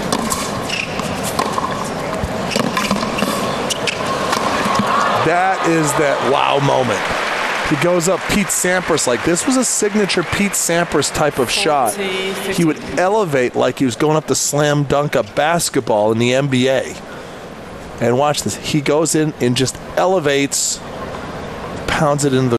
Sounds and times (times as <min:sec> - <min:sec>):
Speech: 0:05.2 - 0:07.1, 0:07.7 - 0:17.0, 0:18.0 - 0:20.8, 0:21.9 - 0:22.5.